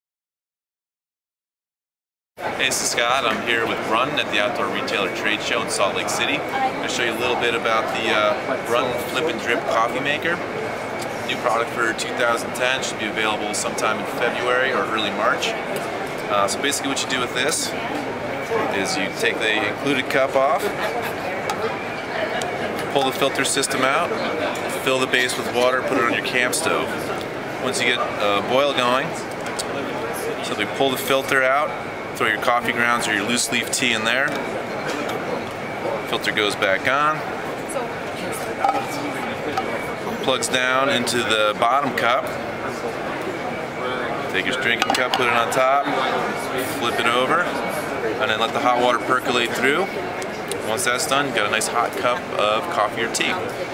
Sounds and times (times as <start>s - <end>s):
Speech: 2.4s - 10.5s, 11.3s - 34.5s, 35.8s - 53.7s.